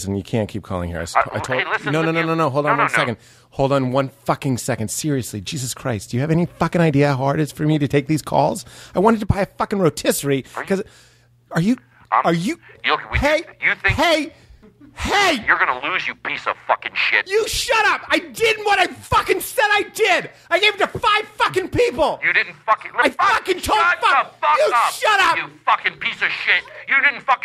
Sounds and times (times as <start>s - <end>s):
Speech: 0.0s - 10.9s, 11.5s - 14.4s, 15.0s - 27.4s.